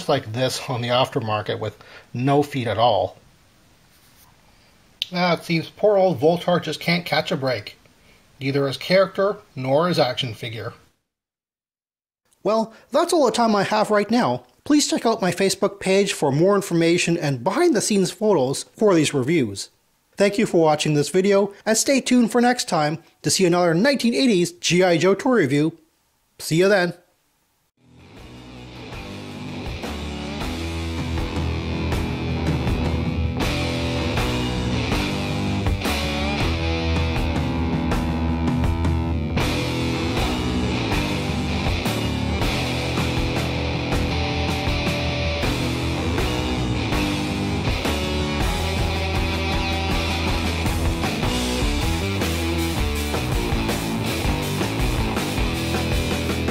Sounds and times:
Punk rock: 28.0 - 56.5.

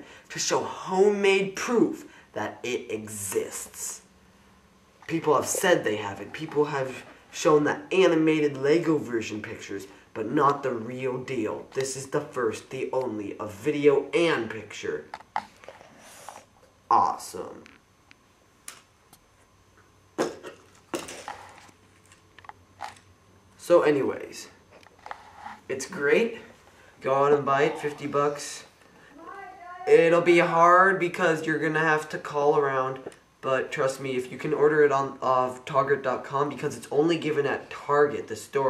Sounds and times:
Speech: 0.0 - 4.1, 5.0 - 15.2, 16.9 - 17.7, 23.6 - 24.6, 25.7 - 38.6.

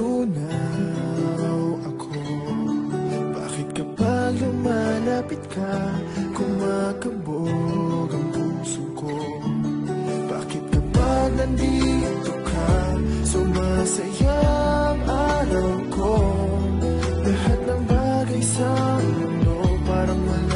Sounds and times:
Background music: 0.0 - 20.5.

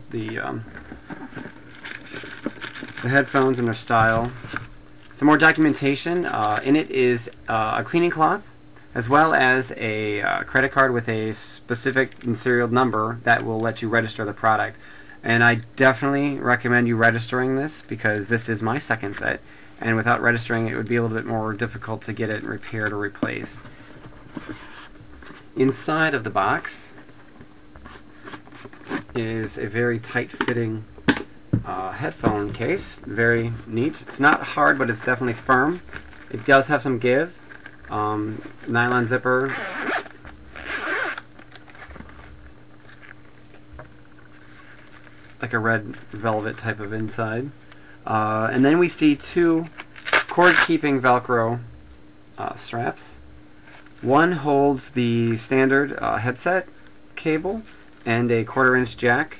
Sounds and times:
Speech: 0.0 - 0.7, 3.0 - 4.4, 5.2 - 23.7, 25.6 - 27.0, 29.1 - 30.9, 31.6 - 39.7, 45.4 - 51.7, 52.4 - 53.2, 54.0 - 59.3.

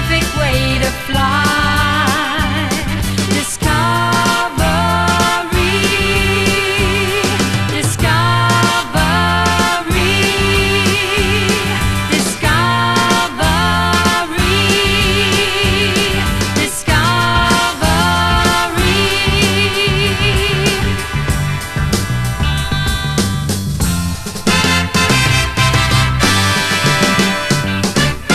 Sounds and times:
Swing music: 0.0 - 28.3.

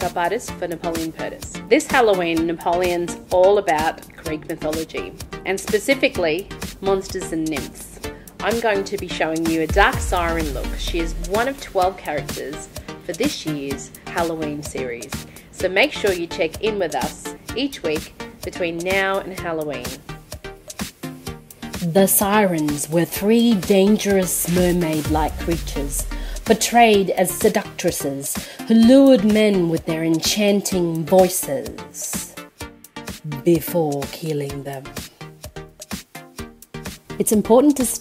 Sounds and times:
Speech: 0.0 - 20.0, 21.8 - 32.4, 33.2 - 34.9, 37.2 - 38.0
Music: 0.0 - 38.0.

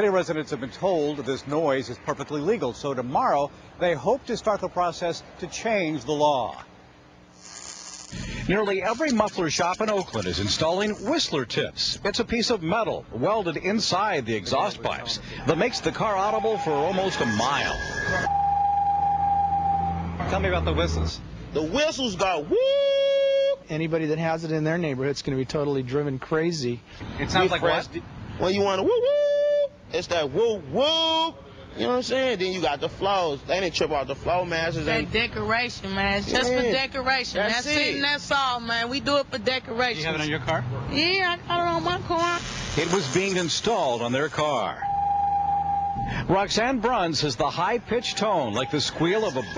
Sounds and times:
Vehicle horn, car horn, honking: 16.2 - 20.2, 44.8 - 46.0.

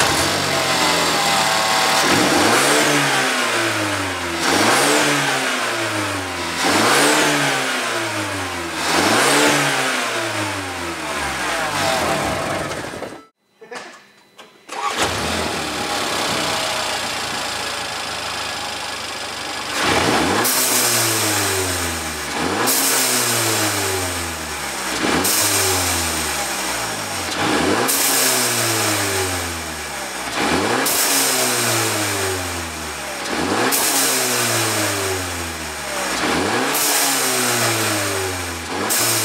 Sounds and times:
Car: 0.0 - 13.3, 14.7 - 39.2
Medium engine (mid frequency): 0.0 - 13.4, 14.7 - 39.2.

